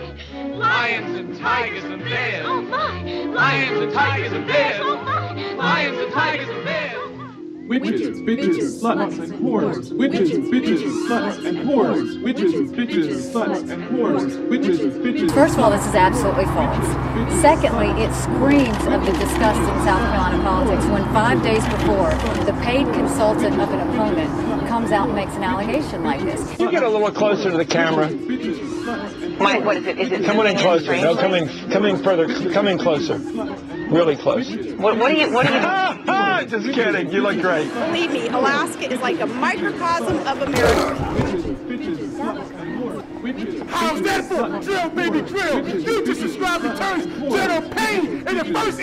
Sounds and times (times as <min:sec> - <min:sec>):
Chatter: 0:07.2 - 0:48.8.